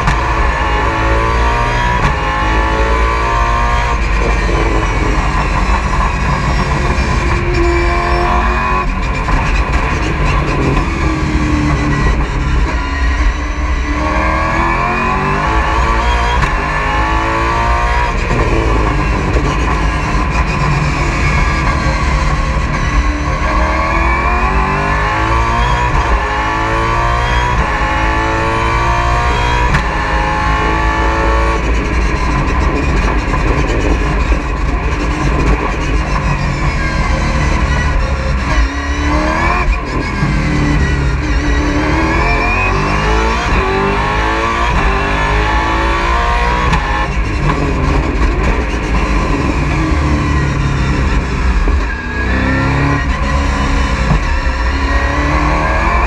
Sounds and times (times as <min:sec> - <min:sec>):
Car: 0:00.0 - 0:56.0.